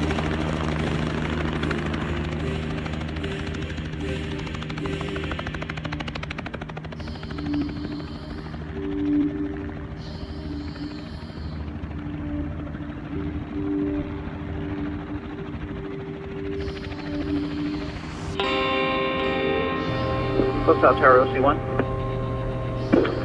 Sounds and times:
Helicopter: 0.0s - 23.2s
Music: 0.0s - 23.2s.

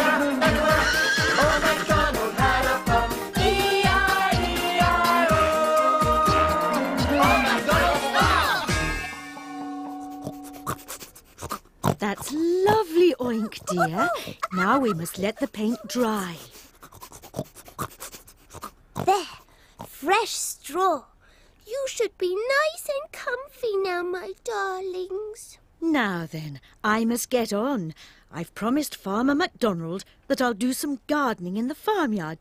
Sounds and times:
Music: 0.0s - 10.8s
Speech: 12.0s - 16.5s, 20.0s - 32.4s.

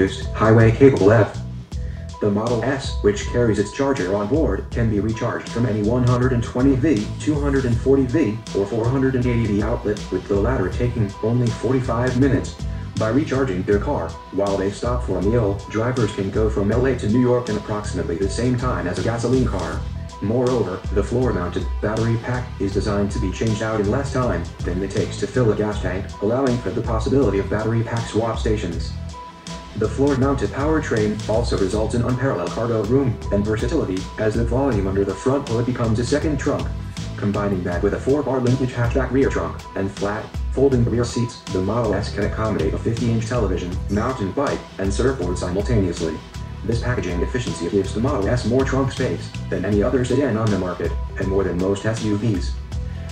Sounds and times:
Speech: 0.0s - 1.4s, 2.2s - 29.0s, 29.7s - 52.6s
Music: 0.0s - 53.1s.

